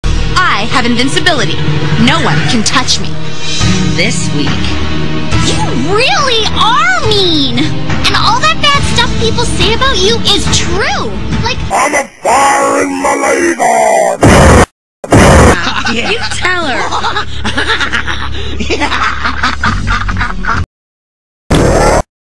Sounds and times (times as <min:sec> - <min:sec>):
Speech: 0:05.5 - 0:14.2.